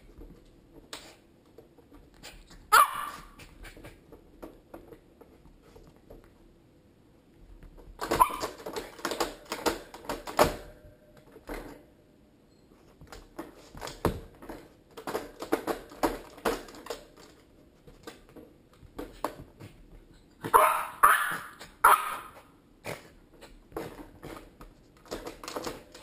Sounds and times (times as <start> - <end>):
Yip: 2.7 - 3.4, 8.1 - 8.6, 20.4 - 22.4.